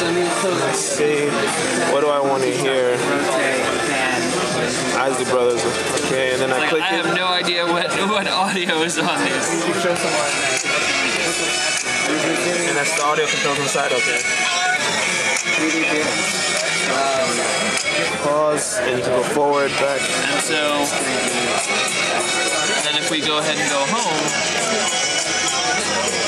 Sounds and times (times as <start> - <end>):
Speech: 0.0 - 11.4, 12.0 - 14.3, 15.4 - 16.2, 16.9 - 17.5, 18.2 - 21.7, 22.6 - 24.4
Music: 0.0 - 26.2.